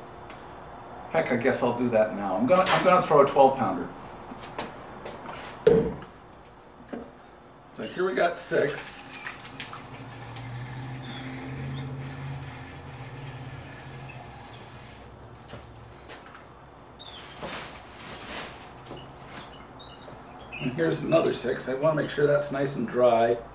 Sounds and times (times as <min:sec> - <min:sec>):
Speech: 0:01.1 - 0:04.0, 0:07.7 - 0:09.0, 0:20.6 - 0:23.5.